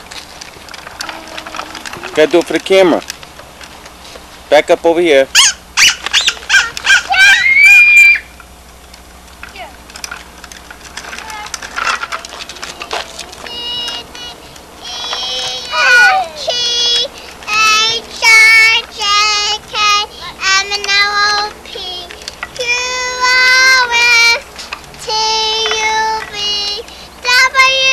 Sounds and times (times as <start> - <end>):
Squeak: 5.4 - 8.2.